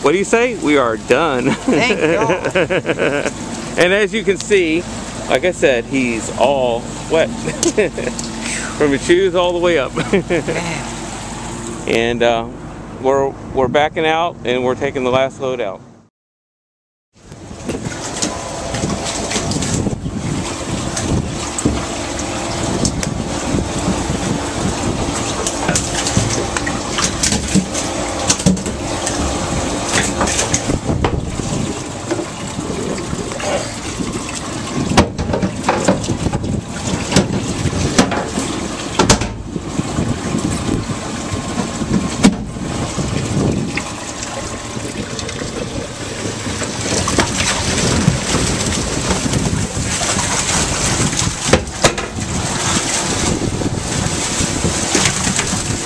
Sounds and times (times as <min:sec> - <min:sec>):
Boat, Water vehicle: 0:00.0 - 0:16.1, 0:17.1 - 0:55.8
Wind noise (microphone): 0:17.2 - 0:55.8.